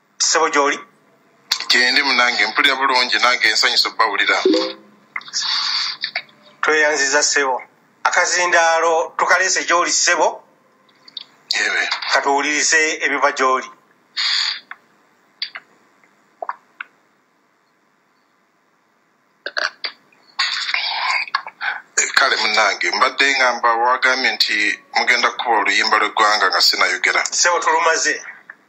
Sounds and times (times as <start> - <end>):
Speech: 0.2 - 0.9, 1.5 - 5.5, 6.6 - 10.4, 11.5 - 13.8, 22.0 - 28.5.